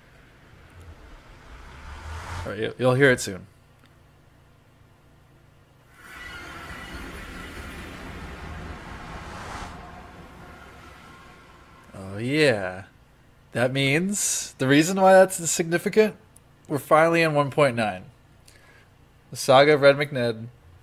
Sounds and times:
Speech: 2.5 - 3.5, 11.9 - 12.9, 13.6 - 18.2, 19.3 - 20.6.

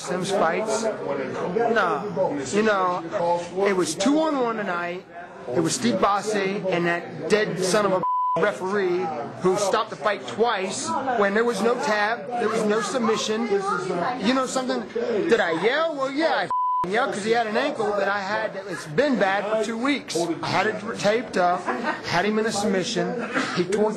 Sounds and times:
Speech: 0.0 - 23.9.

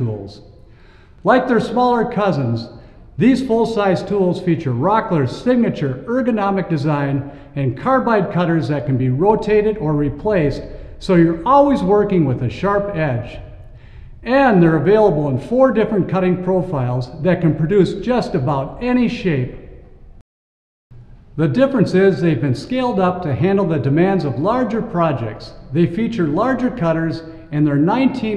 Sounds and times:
Speech: 0.0 - 0.4, 1.2 - 13.5, 14.2 - 19.7, 21.4 - 28.3.

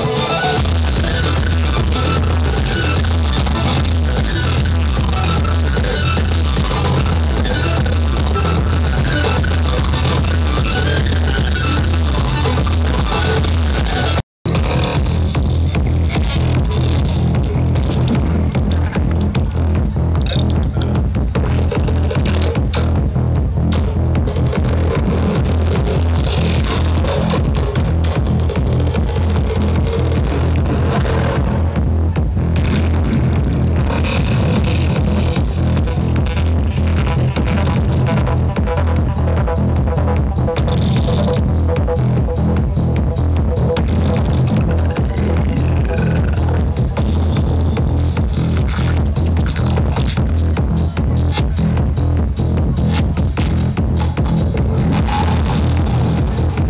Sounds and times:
House music: 0.0 - 56.6
Trance music: 0.0 - 56.6.

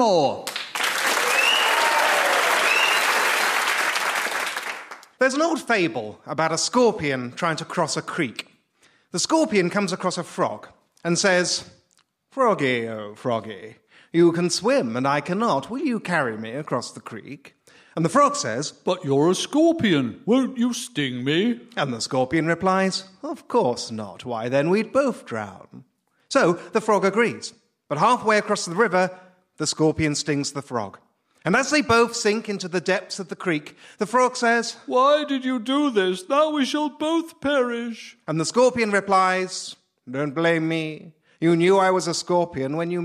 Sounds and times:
Speech: 0.0 - 0.5, 5.2 - 8.5, 9.1 - 43.0.

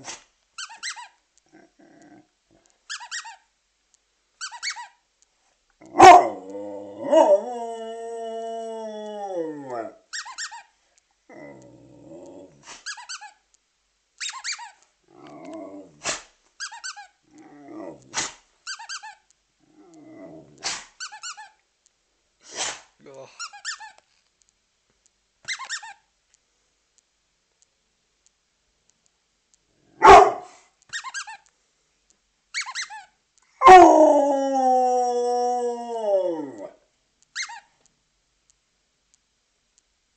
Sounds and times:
Bow-wow: 5.9 - 6.5, 30.0 - 30.6
Howl: 5.9 - 10.0, 33.6 - 36.8.

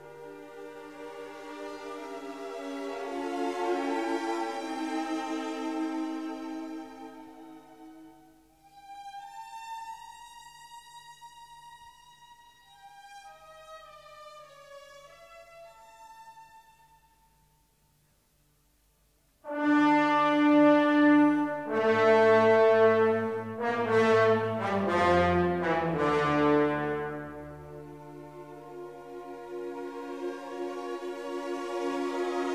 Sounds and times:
Music: 0.0 - 32.5.

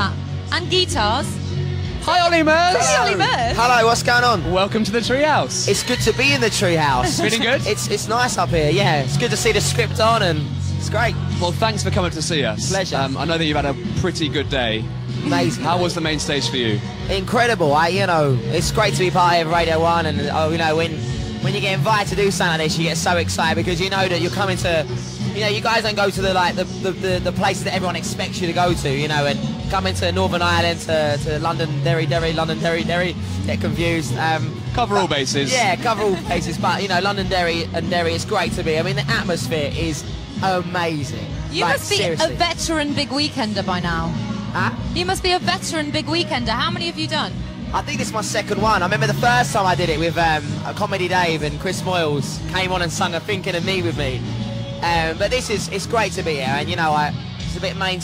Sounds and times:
Music: 0.0 - 58.0
Speech: 2.0 - 54.2, 54.8 - 58.0.

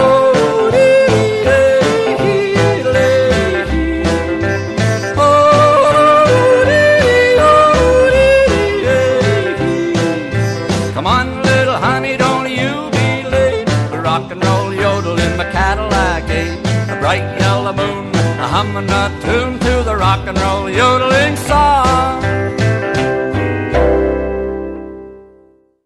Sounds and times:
Music: 0.0 - 25.8.

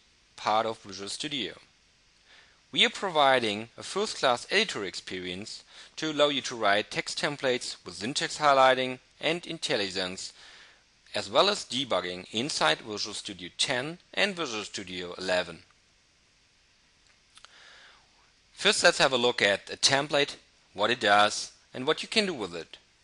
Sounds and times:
Speech: 0.4 - 1.7, 2.8 - 10.4, 11.1 - 15.7, 18.6 - 22.8.

